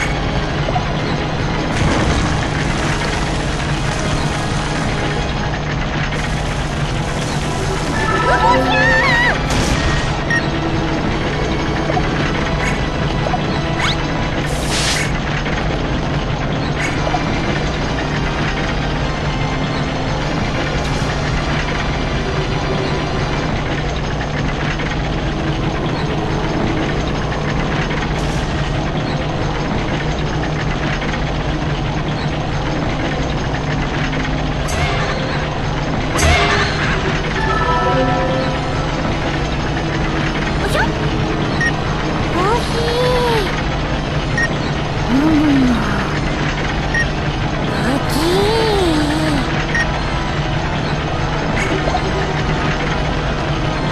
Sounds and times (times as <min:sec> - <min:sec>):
Music: 0:00.0 - 0:53.9.